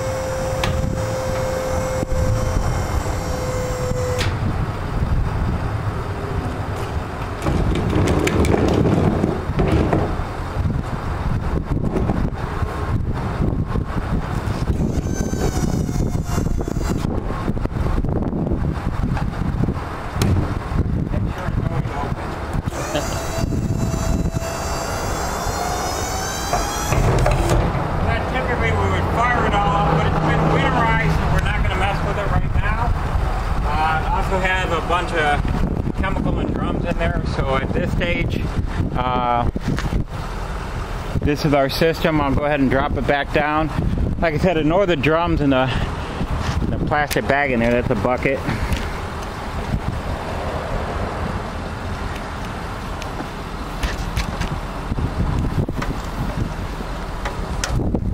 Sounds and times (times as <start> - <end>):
Outside, urban or manmade: 0.0 - 58.1
Truck: 0.0 - 58.1.